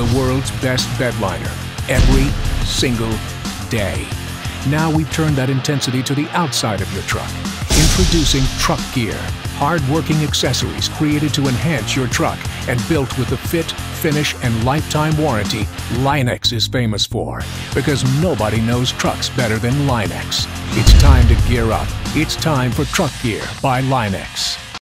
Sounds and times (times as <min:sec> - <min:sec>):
Music: 0:00.0 - 0:16.2, 0:17.4 - 0:24.8
Speech: 0:00.0 - 0:24.8.